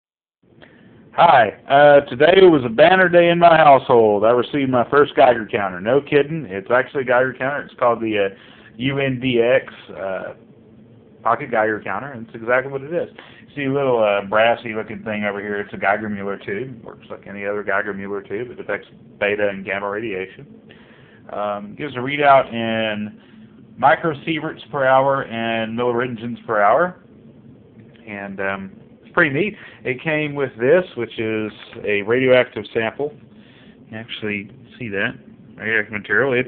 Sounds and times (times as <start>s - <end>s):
Speech: 1.2s - 10.4s, 11.2s - 20.5s, 21.3s - 23.2s, 23.8s - 27.0s, 28.0s - 33.2s, 33.9s - 36.4s.